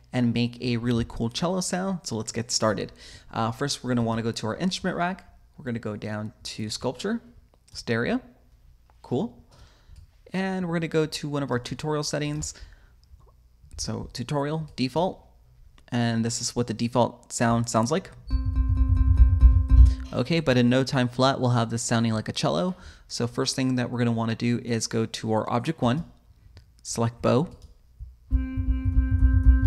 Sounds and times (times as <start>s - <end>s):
Speech: 0.1s - 8.4s, 9.0s - 9.4s, 10.3s - 12.6s, 13.8s - 15.3s, 15.9s - 18.2s, 20.1s - 26.2s, 26.8s - 27.6s.